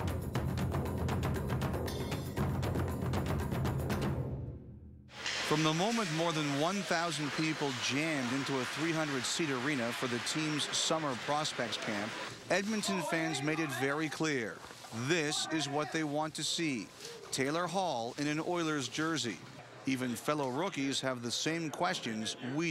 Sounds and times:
Music: 0.0 - 5.1
Speech: 5.5 - 22.7.

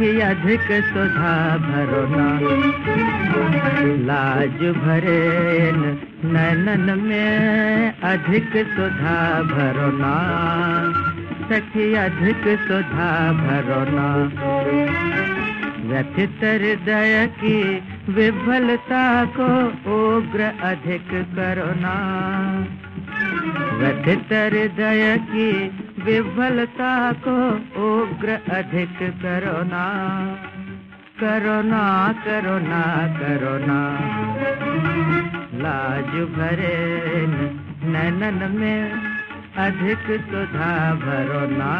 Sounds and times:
Folk music: 0.0 - 41.7.

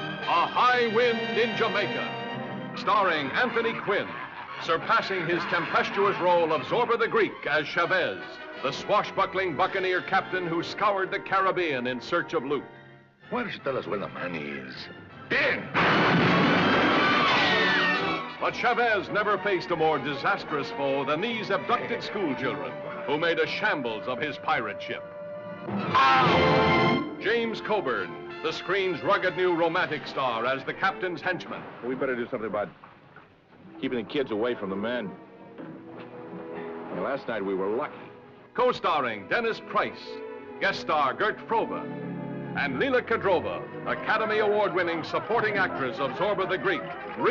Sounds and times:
Music: 0.0 - 32.7, 33.3 - 47.3
Speech: 0.3 - 2.1, 2.8 - 12.6, 13.3 - 15.7, 18.4 - 25.0, 27.2 - 32.8, 33.8 - 35.2, 37.0 - 38.0, 38.6 - 41.8, 42.6 - 47.3.

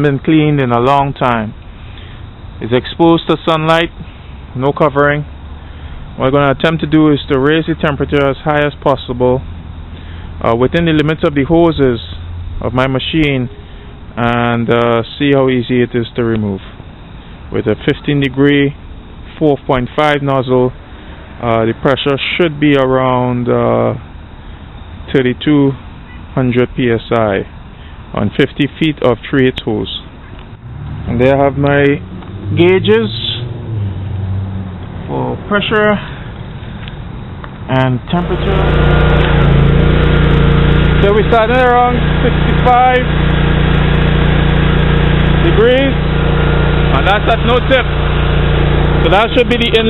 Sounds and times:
Speech: 0.0 - 1.6, 2.6 - 4.0, 4.6 - 5.3, 6.2 - 9.4, 10.4 - 13.5, 14.2 - 16.7, 17.5 - 18.8, 19.4 - 20.8, 21.4 - 24.0, 25.1 - 25.8, 26.4 - 27.5, 28.1 - 30.1, 31.1 - 33.4, 35.1 - 36.1, 37.7 - 38.7, 41.0 - 43.1, 45.4 - 46.0, 46.9 - 47.9, 49.0 - 49.9.

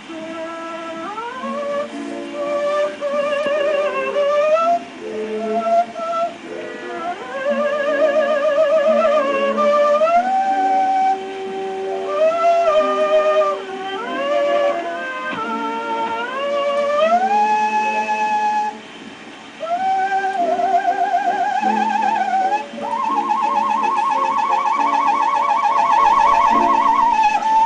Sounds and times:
Music: 0.0 - 27.6.

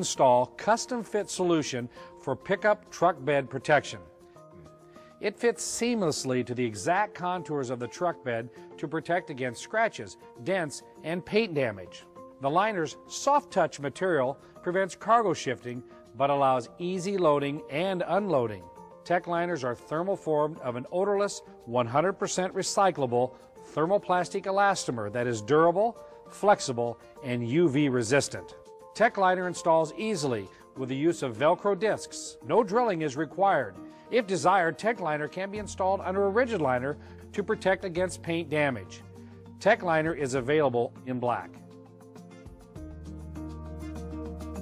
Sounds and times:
Speech: 0.0 - 4.0, 5.2 - 39.0, 39.6 - 41.6
Music: 0.0 - 44.6.

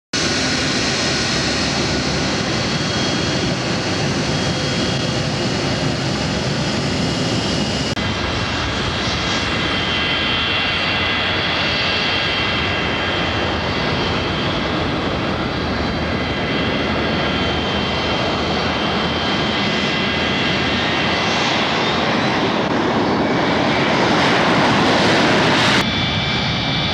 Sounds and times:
Fixed-wing aircraft, airplane: 0.1 - 26.9.

